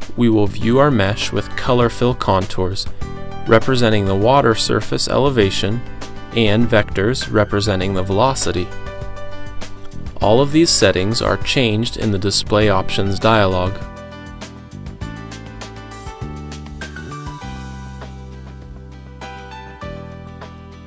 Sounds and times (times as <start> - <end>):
Music: 0.0 - 20.8
Speech: 0.2 - 2.9, 3.5 - 8.7, 10.2 - 13.9.